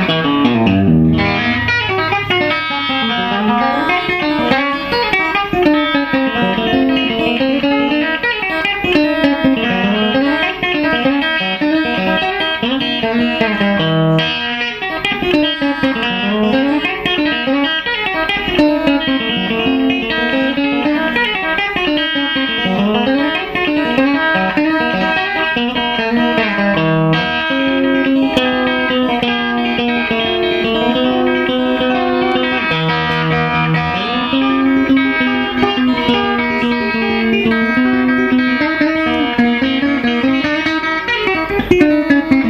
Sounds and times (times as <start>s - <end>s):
Music: 0.0s - 42.4s.